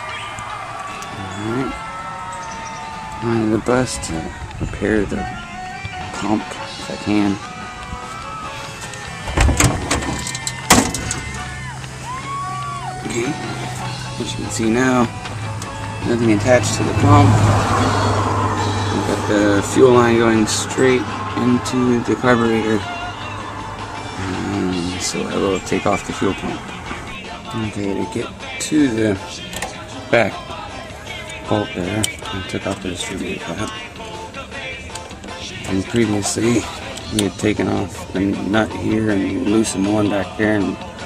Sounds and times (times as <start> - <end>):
Music: 0.0 - 41.0
Speech: 6.1 - 7.4, 19.0 - 22.8, 24.2 - 26.6, 27.6 - 29.2, 31.5 - 33.7, 35.7 - 40.8.